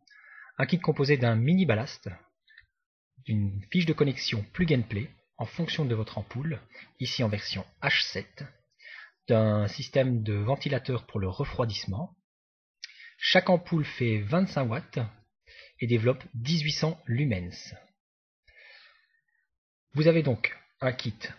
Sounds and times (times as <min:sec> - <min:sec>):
Speech: 0:00.0 - 0:02.2, 0:03.2 - 0:12.2, 0:12.8 - 0:17.9, 0:20.0 - 0:21.3.